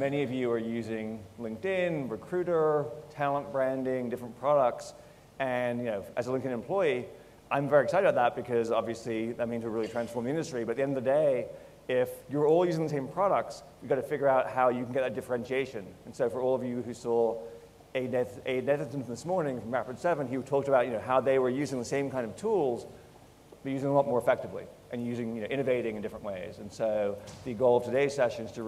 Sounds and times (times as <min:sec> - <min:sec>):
Speech: 0:00.0 - 0:23.0, 0:23.6 - 0:28.6.